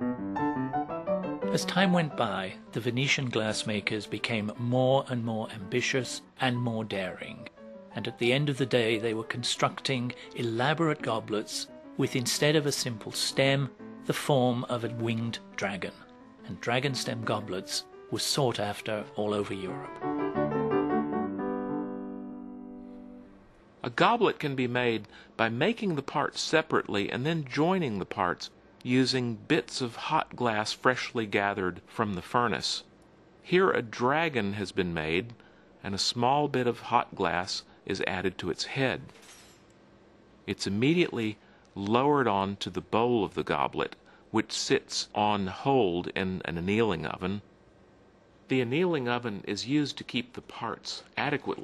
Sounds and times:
Speech: 0:01.5 - 0:19.9, 0:23.8 - 0:32.9, 0:33.5 - 0:39.2, 0:40.5 - 0:47.5, 0:48.5 - 0:51.6.

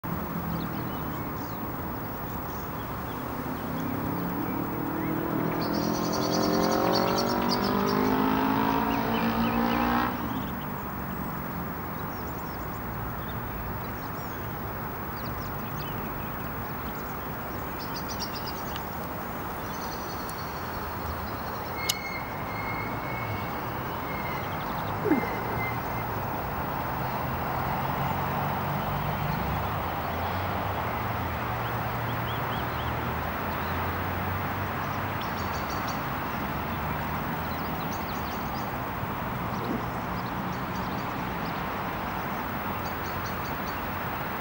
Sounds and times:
Race car, auto racing: 0:02.5 - 0:10.8, 0:27.6 - 0:43.8.

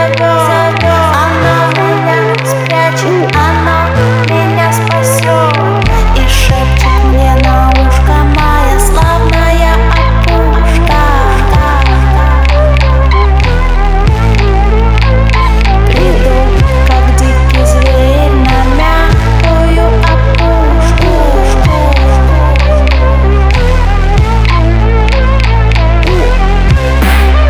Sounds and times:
Music: 0:00.0 - 0:27.5.

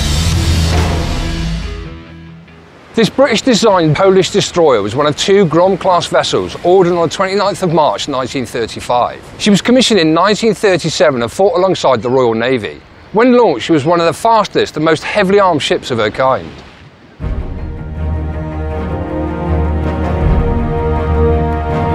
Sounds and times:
Speech: 0:03.0 - 0:16.7.

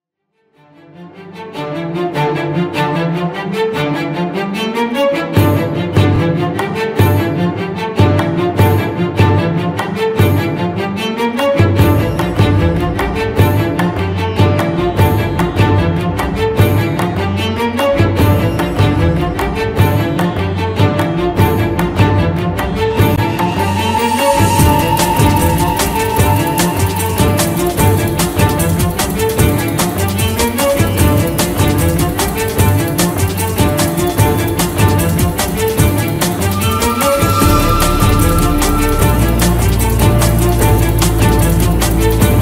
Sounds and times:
Cello: 0:00.4 - 0:42.4
Violin, fiddle: 0:00.6 - 0:32.8.

